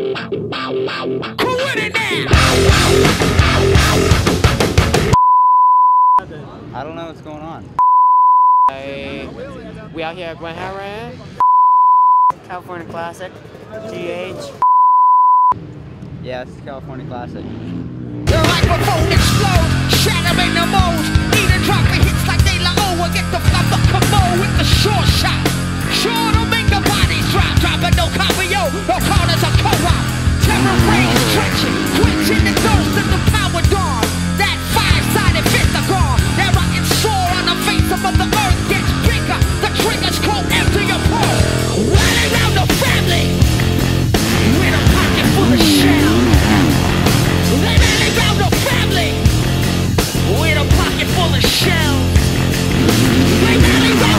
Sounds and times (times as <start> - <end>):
Motorcycle: 2.4 - 5.1, 15.6 - 54.1
Beep, bleep: 5.2 - 6.2, 7.8 - 8.7, 11.4 - 12.4, 14.6 - 15.6.